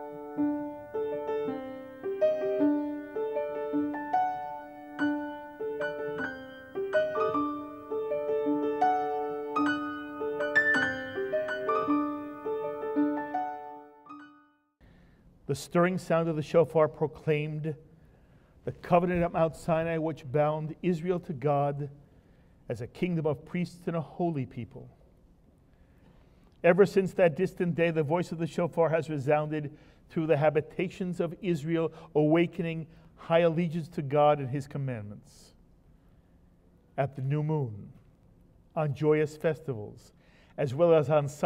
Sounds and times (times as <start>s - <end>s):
Speech: 15.5s - 17.8s, 18.7s - 22.0s, 22.7s - 25.0s, 26.6s - 35.6s, 37.0s - 38.0s, 38.8s - 41.4s.